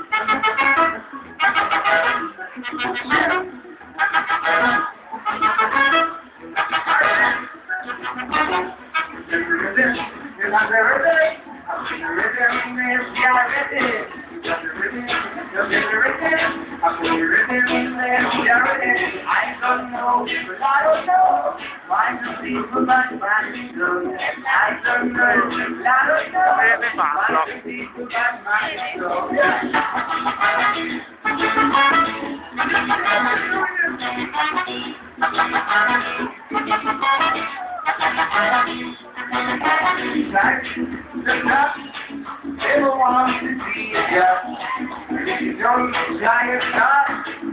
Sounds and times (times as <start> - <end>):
Music: 0.0 - 47.5
Speech: 26.5 - 27.6.